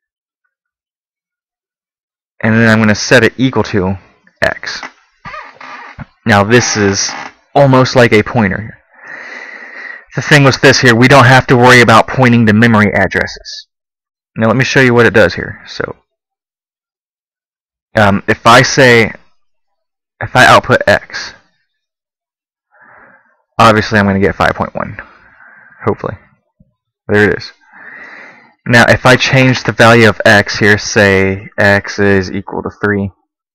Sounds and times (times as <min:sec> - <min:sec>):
Narration, monologue: 0:02.4 - 0:16.2, 0:17.9 - 0:21.9, 0:22.7 - 0:33.4.